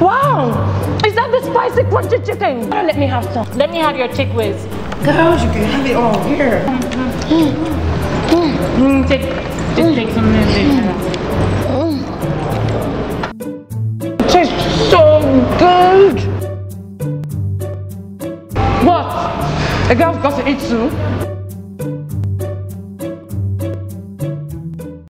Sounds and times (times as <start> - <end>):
Music: 0.0 - 25.1.